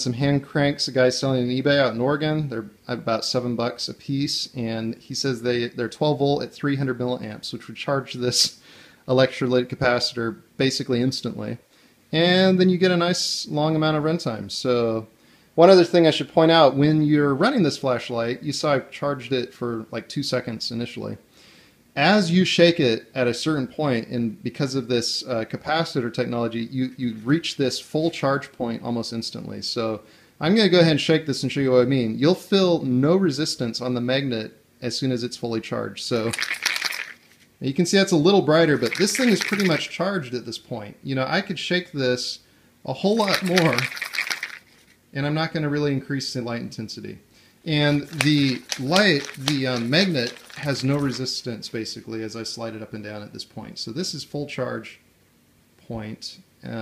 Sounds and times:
Speech: 0:00.0 - 0:21.3, 0:22.0 - 0:36.4, 0:37.6 - 0:43.9, 0:45.1 - 0:55.0, 0:55.8 - 0:56.8.

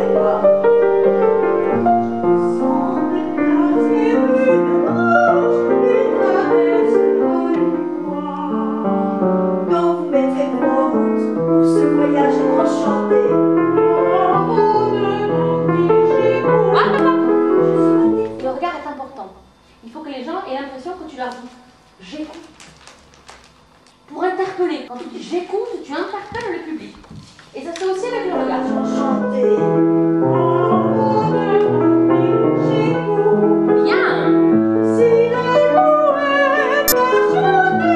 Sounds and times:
Music: 0:00.0 - 0:19.5, 0:28.0 - 0:37.9
Speech: 0:18.2 - 0:22.6, 0:24.1 - 0:27.0, 0:27.6 - 0:29.2.

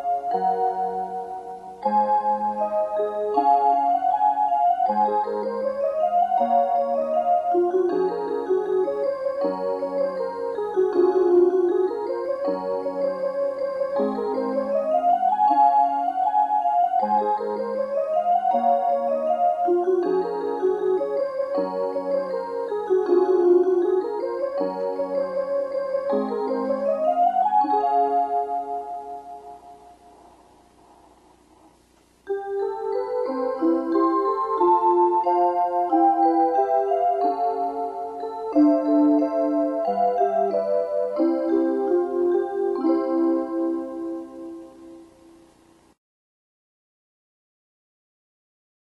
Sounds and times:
Music: 0:00.0 - 0:46.0.

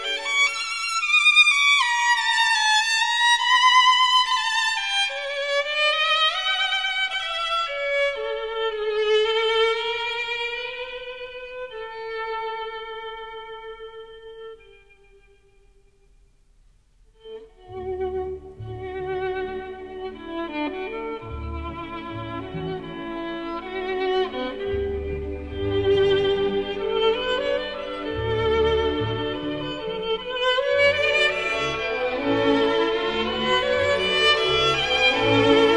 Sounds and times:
Violin, fiddle: 0:00.0 - 0:15.4, 0:17.2 - 0:35.7.

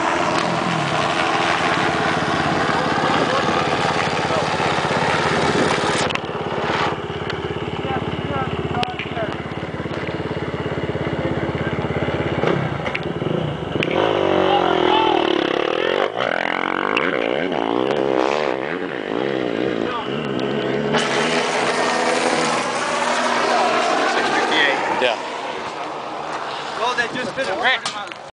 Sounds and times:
Speech: 0:02.7 - 0:03.6, 0:07.8 - 0:09.4, 0:14.4 - 0:16.0, 0:26.8 - 0:28.2.

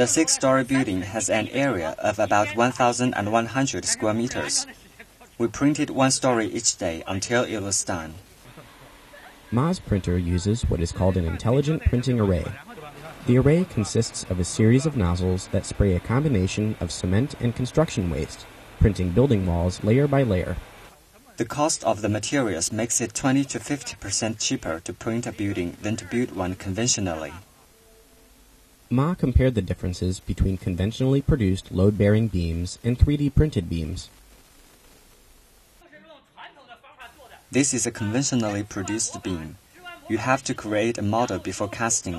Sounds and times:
Speech: 0:00.0 - 0:08.2, 0:09.1 - 0:27.5, 0:28.9 - 0:34.1, 0:35.8 - 0:42.1.

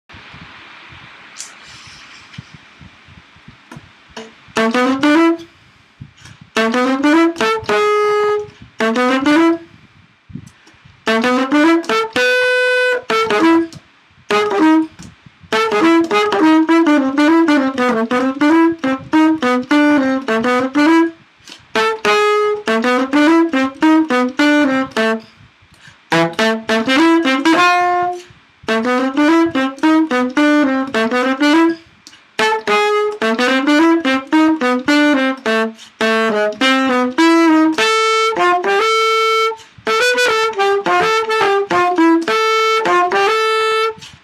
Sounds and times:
Inside, small room: 0:00.1 - 0:44.2
Jazz: 0:00.2 - 0:44.2
Saxophone: 0:03.7 - 0:09.8, 0:10.4 - 0:44.2.

